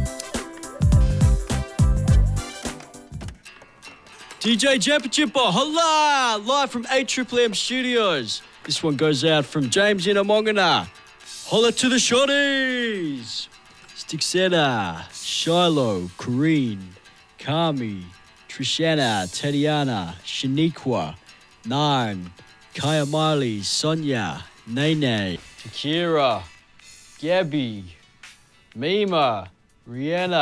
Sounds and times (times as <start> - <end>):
Music: 0.0 - 30.4
Speech: 4.4 - 10.9, 11.5 - 26.5, 27.2 - 28.0, 28.8 - 30.4.